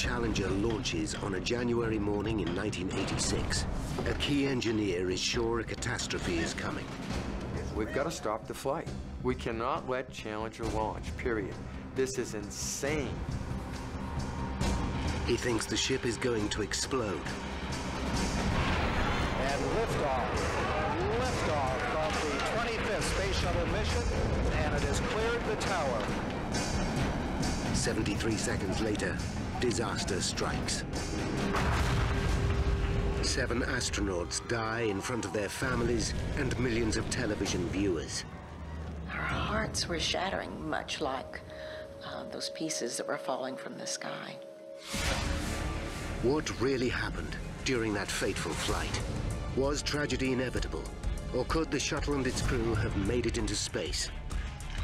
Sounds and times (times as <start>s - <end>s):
Music: 0.0s - 54.8s
Explosion: 18.2s - 27.8s, 31.1s - 34.0s, 44.9s - 45.8s.